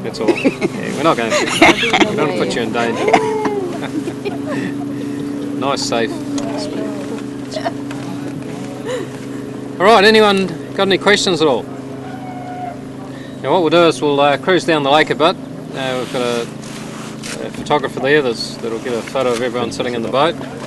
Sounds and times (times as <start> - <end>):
Motorboat, speedboat: 0.0 - 20.6.